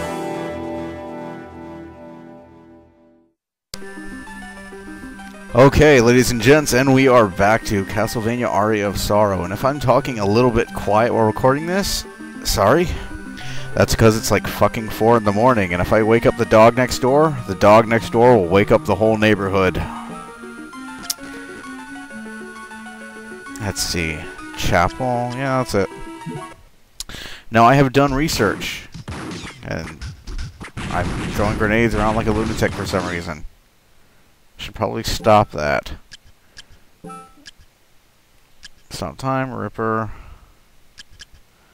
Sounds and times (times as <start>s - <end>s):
Speech: 5.6s - 13.0s, 13.8s - 19.9s, 23.6s - 25.9s, 27.5s - 28.9s, 29.6s - 30.0s, 30.9s - 33.5s, 34.6s - 36.0s, 38.9s - 40.2s.